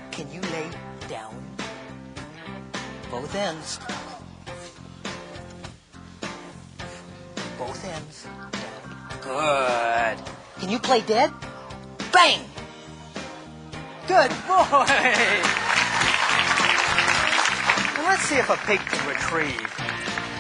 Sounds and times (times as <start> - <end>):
Music: 0.0 - 20.4
Speech: 18.0 - 19.7.